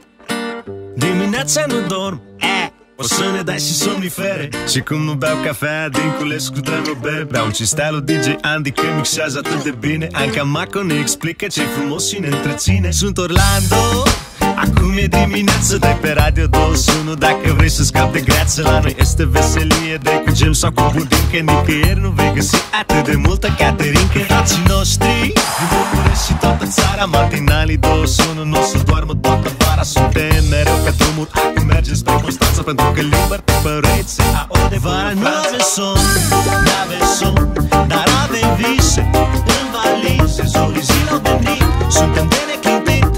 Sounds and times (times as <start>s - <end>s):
Music: 0.0s - 43.1s.